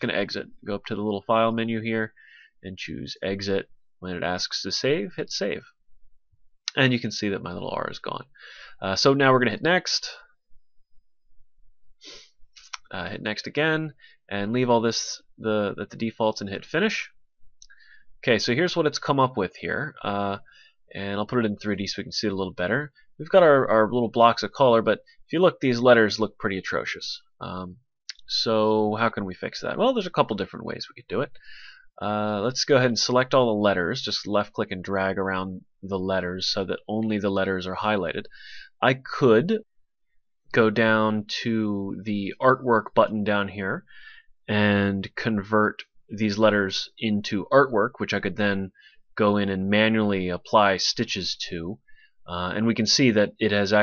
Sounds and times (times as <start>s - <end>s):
Speech: 0.0s - 5.8s, 6.7s - 10.3s, 12.7s - 17.2s, 18.2s - 31.4s, 32.0s - 39.6s, 40.5s - 43.9s, 44.5s - 53.8s.